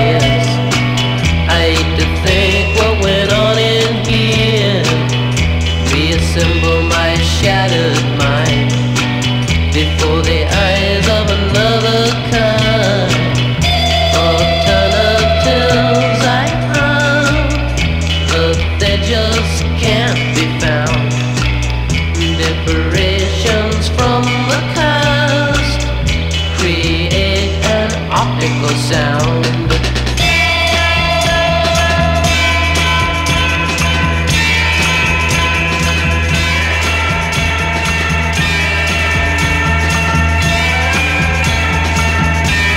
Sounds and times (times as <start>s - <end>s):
Music: 0.0s - 42.7s.